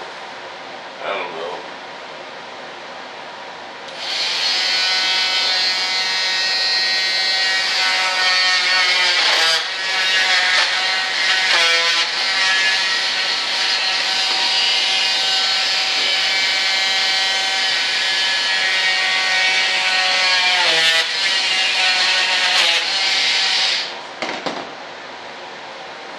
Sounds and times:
Mechanisms: 0.0 - 26.1.

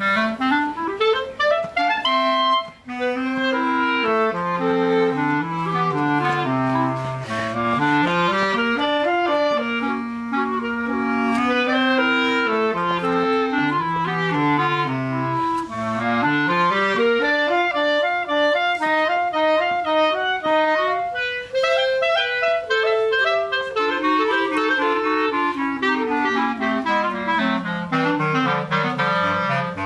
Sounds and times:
Clarinet: 0.0 - 29.8.

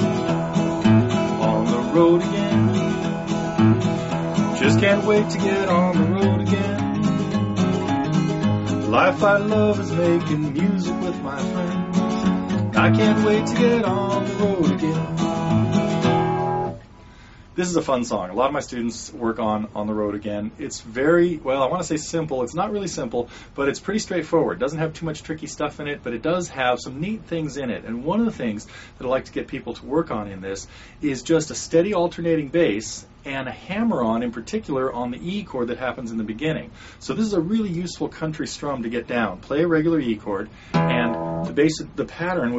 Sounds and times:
Guitar: 0.0 - 33.2, 37.0 - 42.5
Speech: 17.6 - 42.5.

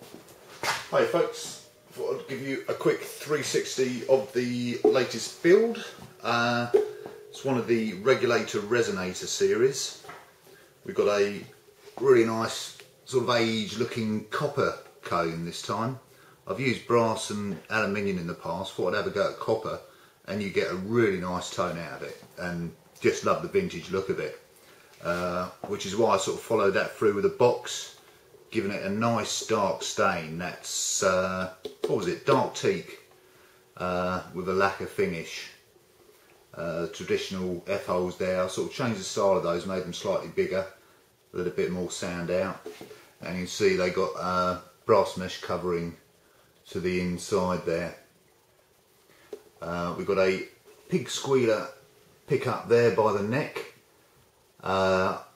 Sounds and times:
Speech: 0.7 - 10.2, 10.8 - 33.1, 33.8 - 35.6, 36.5 - 48.1, 49.6 - 53.8, 54.6 - 55.3.

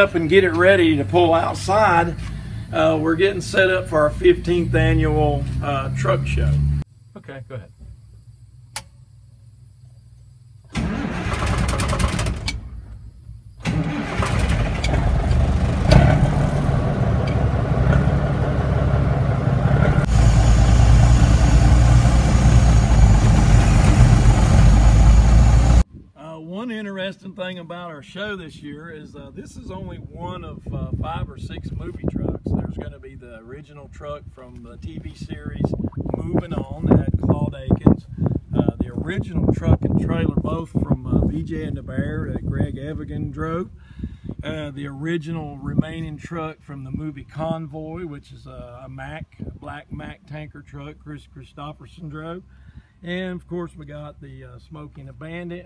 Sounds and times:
Truck: 0.0 - 7.0, 7.7 - 25.8.

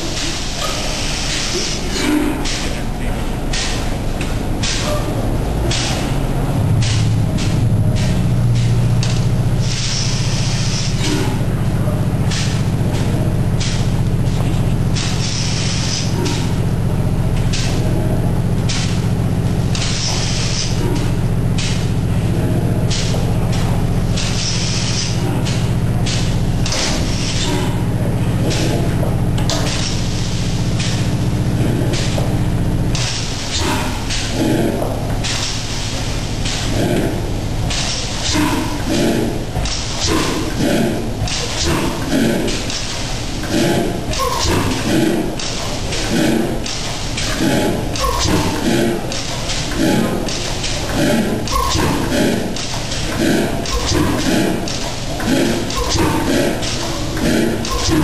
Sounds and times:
Medium engine (mid frequency): 0.0 - 58.0.

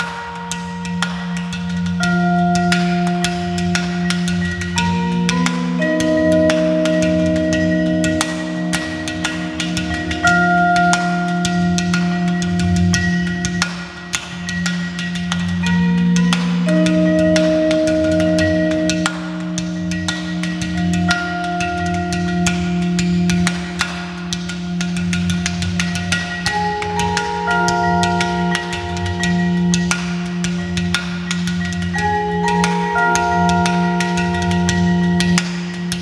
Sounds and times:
Percussion: 0.0 - 36.0.

